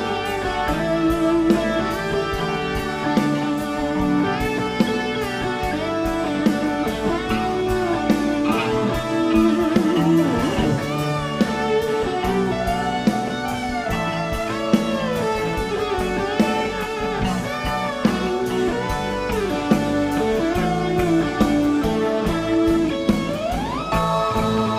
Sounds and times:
Electric guitar: 0:00.0 - 0:24.7.

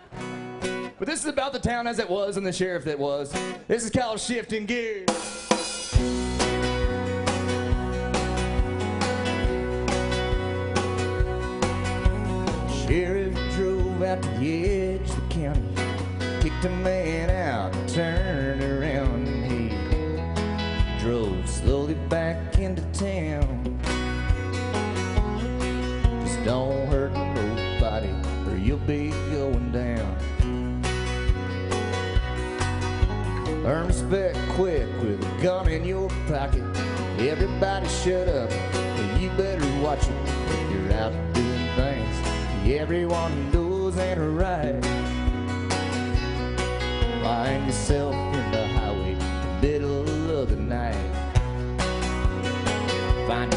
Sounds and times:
Music: 0:00.0 - 0:53.5.

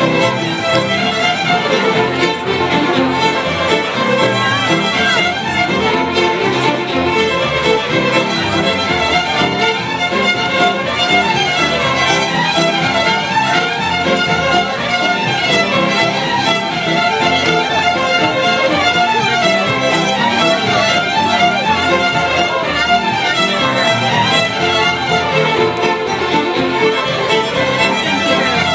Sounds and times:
Violin, fiddle: 0:00.0 - 0:28.7.

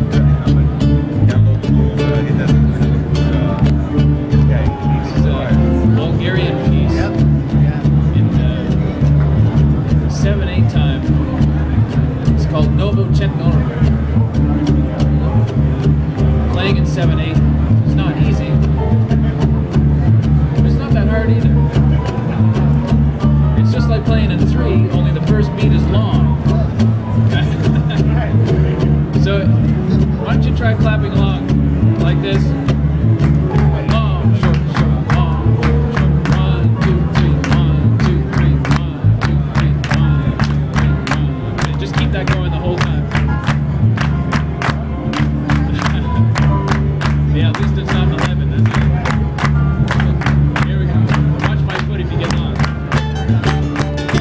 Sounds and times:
Speech: 0:00.0 - 0:32.7, 0:33.4 - 0:43.5, 0:47.2 - 0:53.6
Ukulele: 0:00.0 - 0:54.2.

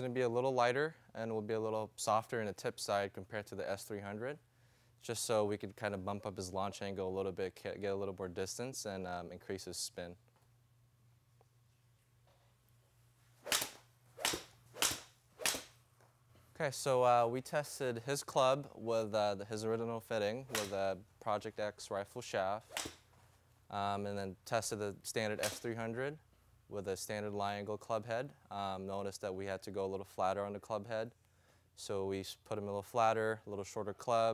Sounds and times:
Speech: 0:00.0 - 0:04.4, 0:05.0 - 0:10.2, 0:16.6 - 0:22.7, 0:23.7 - 0:31.2, 0:31.8 - 0:34.3.

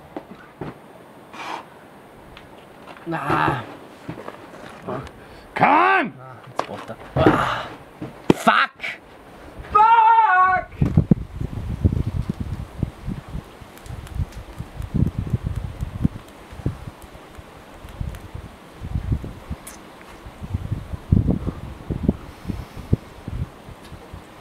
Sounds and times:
Wind: 0:00.0 - 0:24.4
Speech: 0:03.1 - 0:03.7, 0:04.9 - 0:07.4.

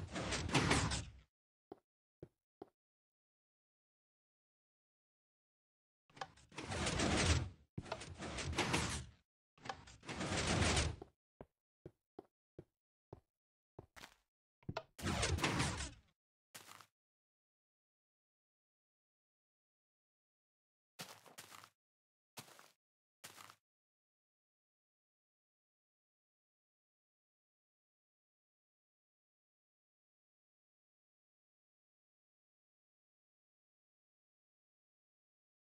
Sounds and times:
Sliding door: 0:00.0 - 0:01.1, 0:06.6 - 0:11.1, 0:15.0 - 0:16.0.

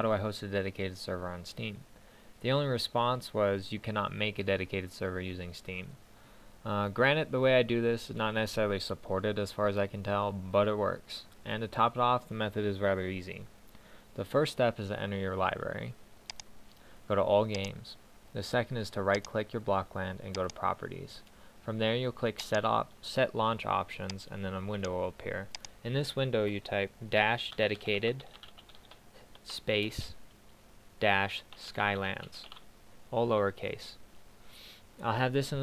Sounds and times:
Speech: 0:00.0 - 0:06.0, 0:06.6 - 0:13.5, 0:14.2 - 0:16.0, 0:17.1 - 0:28.4, 0:29.4 - 0:30.2, 0:31.0 - 0:34.0, 0:35.0 - 0:35.6.

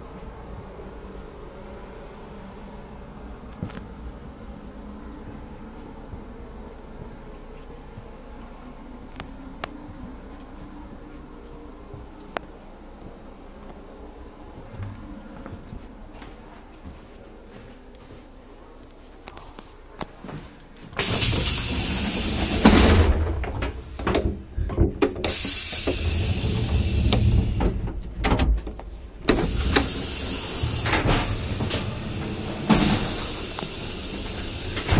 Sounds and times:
Hiss: 0:21.0 - 0:23.1, 0:25.3 - 0:27.8, 0:29.3 - 0:34.9.

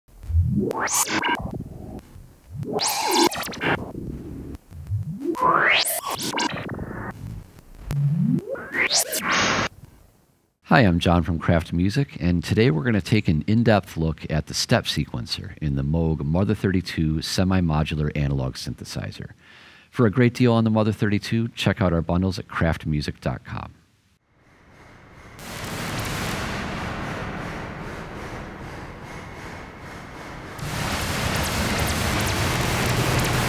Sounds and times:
Electronic music: 0:00.1 - 0:07.2, 0:07.8 - 0:09.7
Synthesizer: 0:00.1 - 0:07.2.

